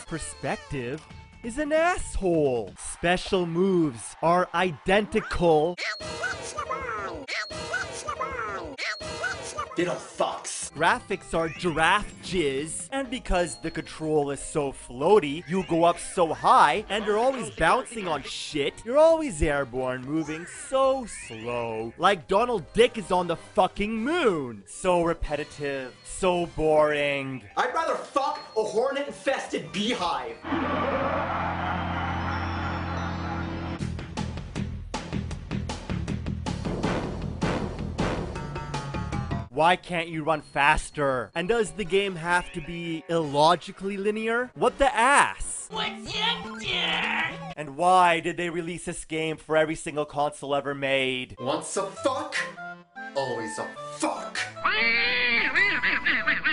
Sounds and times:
Speech: 0.0 - 5.8, 9.8 - 30.4, 39.5 - 52.5.

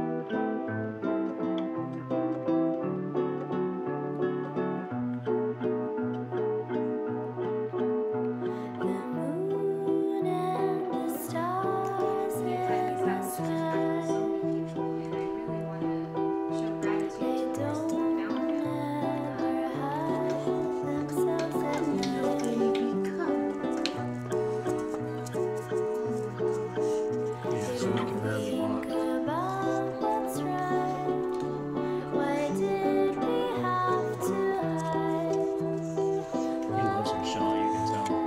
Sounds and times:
Music: 0.0 - 38.2.

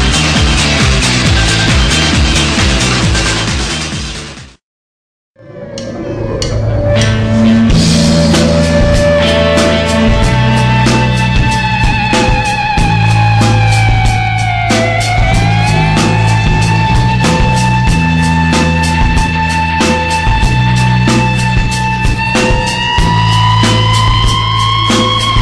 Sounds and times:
Music: 0.0 - 4.6, 5.4 - 25.4.

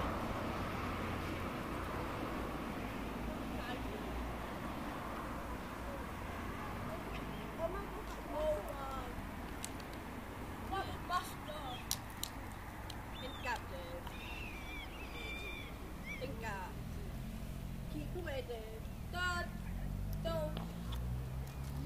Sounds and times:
Speech: 10.7 - 11.9, 13.2 - 14.1, 16.1 - 16.8, 17.9 - 20.6.

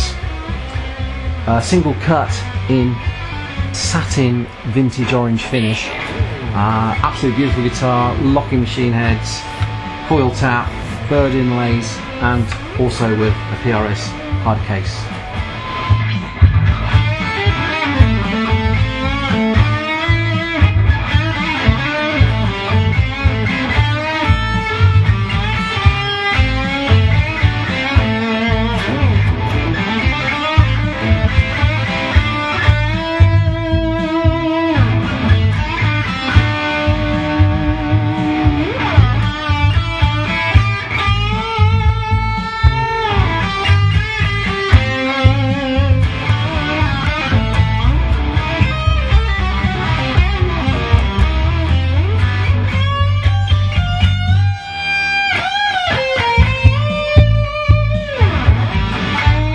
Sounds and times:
Music: 0.0 - 59.5
Speech: 1.5 - 3.0, 3.8 - 6.0, 6.6 - 9.5, 10.1 - 15.1.

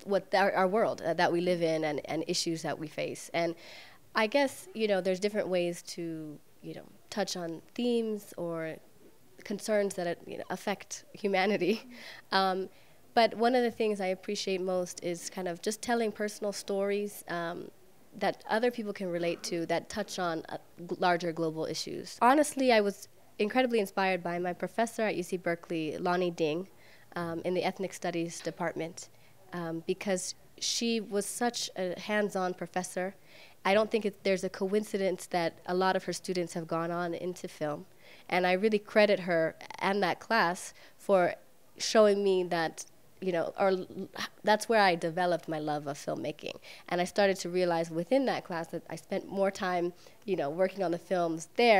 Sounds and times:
Speech: 0.0 - 3.6, 4.2 - 8.8, 9.4 - 51.7.

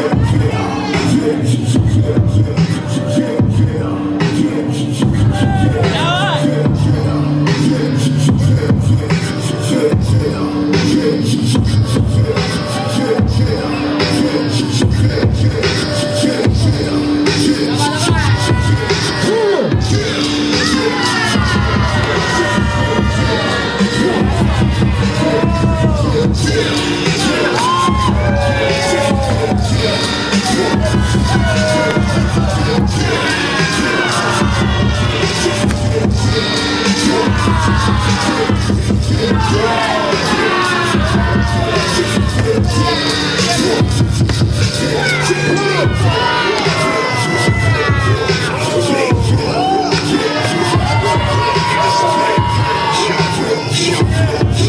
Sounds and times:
Music: 0.0 - 54.6.

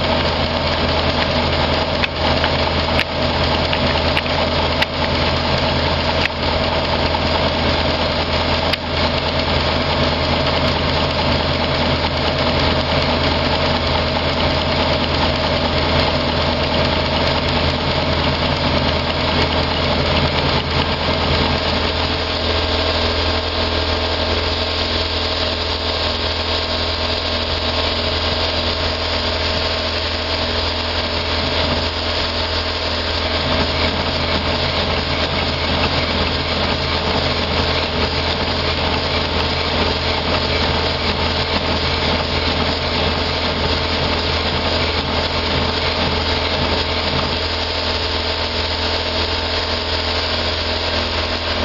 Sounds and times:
Engine: 0.0 - 51.6.

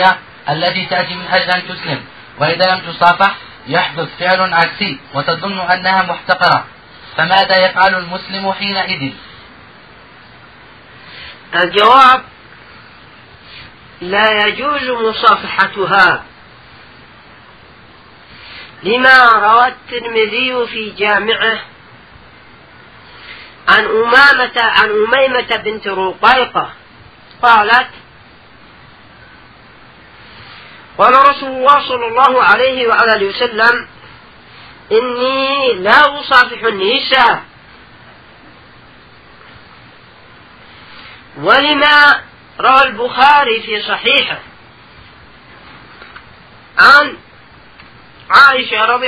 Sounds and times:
Speech: 0.0 - 9.3, 11.5 - 12.3, 14.0 - 16.3, 18.8 - 21.7, 23.7 - 26.8, 27.4 - 28.0, 31.0 - 33.9, 34.9 - 37.5, 41.4 - 44.5, 46.8 - 47.2, 48.3 - 49.0.

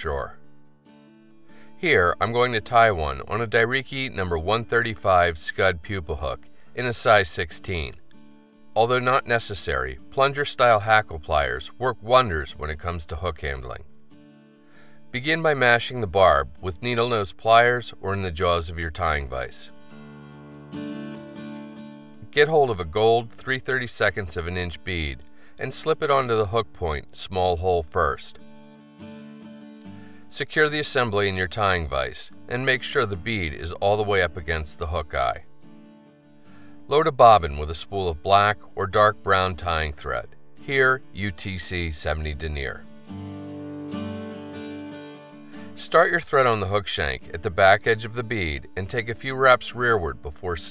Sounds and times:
Speech: 0.0 - 0.4, 1.8 - 8.0, 8.8 - 13.9, 15.2 - 19.8, 22.2 - 28.4, 30.3 - 35.5, 36.9 - 42.9, 45.8 - 50.7
Music: 0.0 - 50.7.

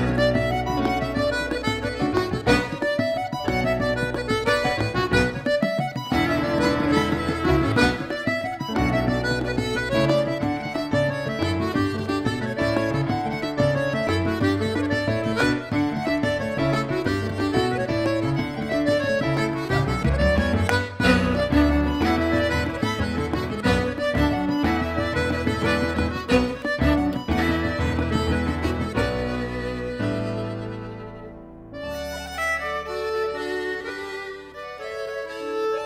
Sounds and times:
Music: 0.0 - 35.8.

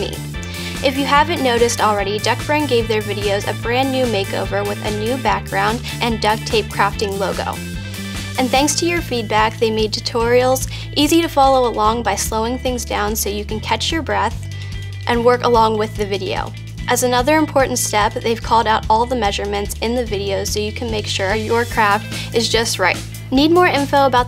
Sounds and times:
Speech: 0.0 - 7.6, 8.4 - 14.5, 15.1 - 24.2
Music: 0.0 - 24.2.

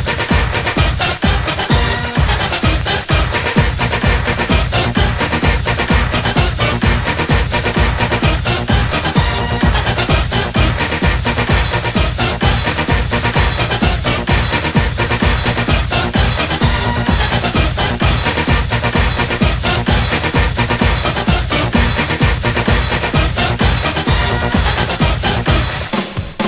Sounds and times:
Techno: 0.0 - 26.4.

